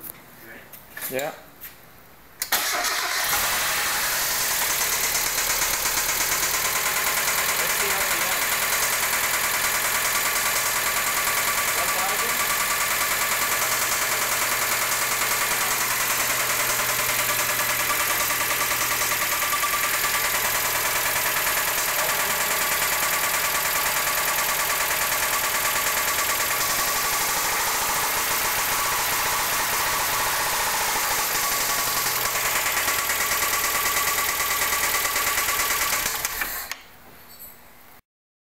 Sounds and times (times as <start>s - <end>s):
Idling: 2.6s - 36.7s.